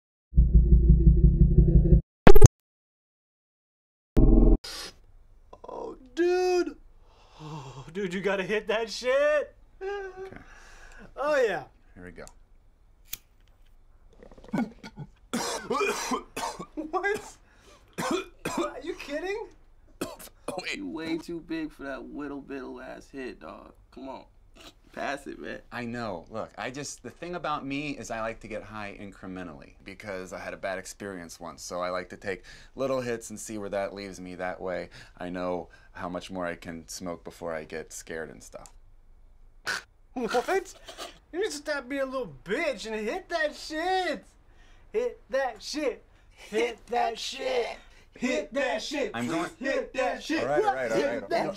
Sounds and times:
Inside, small room: 0:04.2 - 0:51.5
Speech: 0:07.9 - 0:09.6, 0:11.2 - 0:12.4, 0:40.2 - 0:44.3, 0:45.0 - 0:51.5.

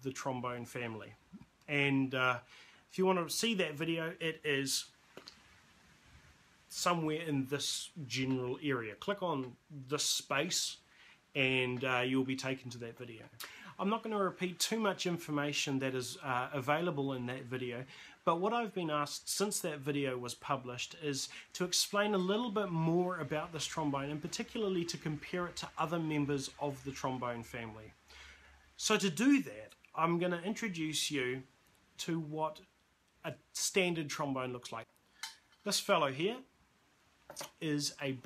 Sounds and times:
Speech: 0:00.0 - 0:05.0, 0:06.7 - 0:10.8, 0:11.4 - 0:28.0, 0:28.8 - 0:34.9, 0:35.6 - 0:36.5, 0:37.4 - 0:38.2.

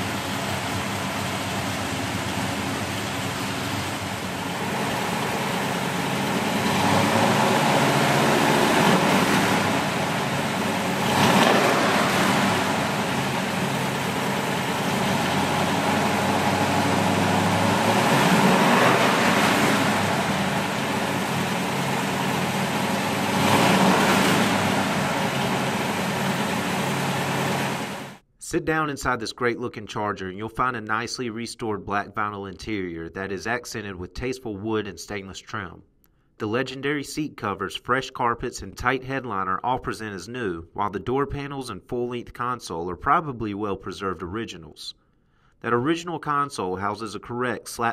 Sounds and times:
Car: 0:00.0 - 0:28.2.

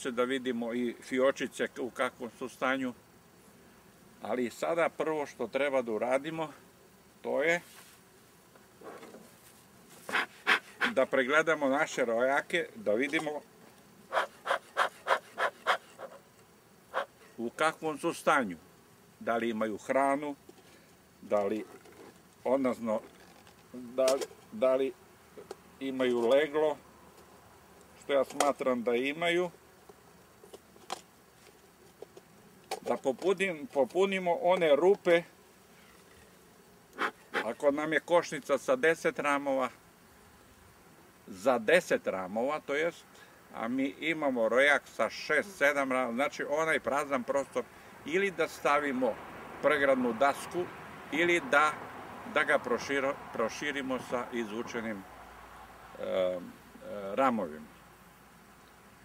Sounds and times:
Speech: 0:00.0 - 0:03.0, 0:04.2 - 0:06.6, 0:07.3 - 0:07.7, 0:10.9 - 0:13.4, 0:17.4 - 0:18.6, 0:19.2 - 0:20.4, 0:21.2 - 0:21.8, 0:22.5 - 0:23.1, 0:23.8 - 0:25.0, 0:25.8 - 0:26.8, 0:28.0 - 0:29.6, 0:32.8 - 0:35.3, 0:37.4 - 0:39.8, 0:41.3 - 0:43.0, 0:43.6 - 0:55.0, 0:56.0 - 0:57.7.

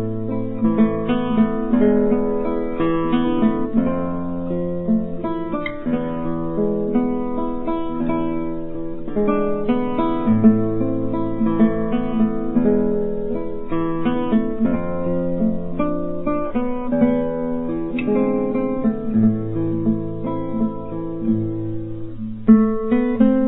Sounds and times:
Acoustic guitar: 0:00.0 - 0:23.4.

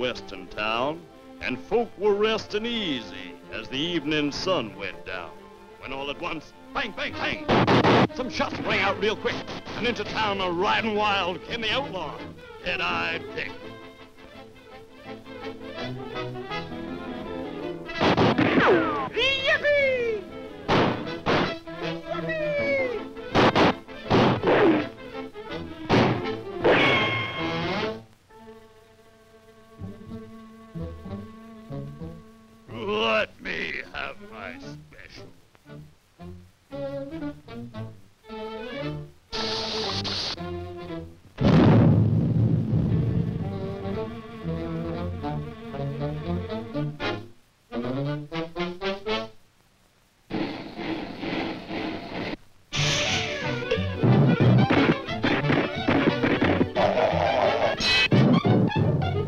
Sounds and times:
Music: 0:00.0 - 0:49.5, 0:50.3 - 0:59.2.

